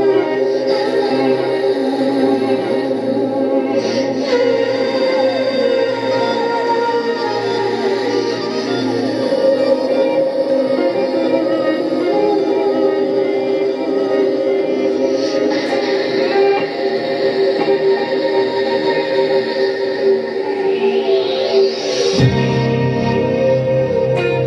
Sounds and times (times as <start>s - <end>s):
Electric guitar: 0.0s - 24.4s.